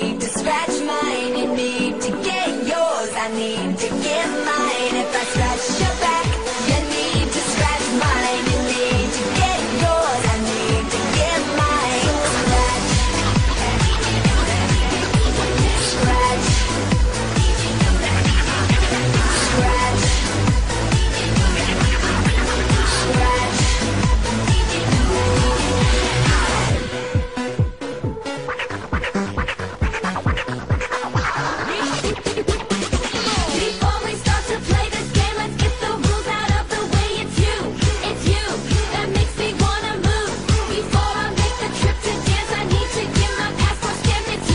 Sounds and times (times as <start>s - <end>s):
Dance music: 0.0s - 44.5s.